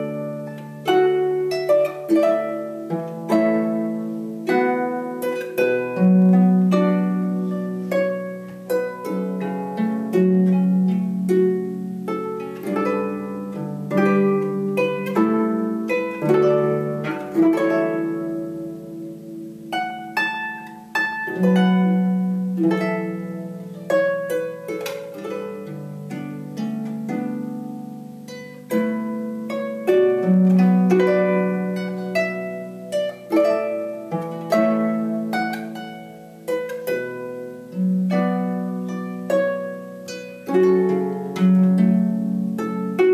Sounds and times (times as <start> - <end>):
Harp: 0.0 - 43.1
Pizzicato: 0.0 - 43.1.